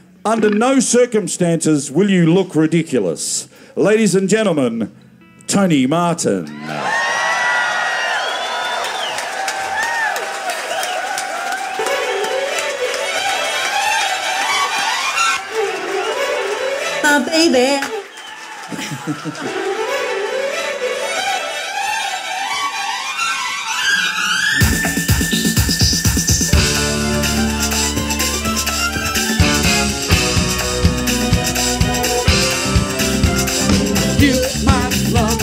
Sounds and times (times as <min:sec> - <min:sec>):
Music: 0:05.1 - 0:06.8, 0:11.5 - 0:35.4.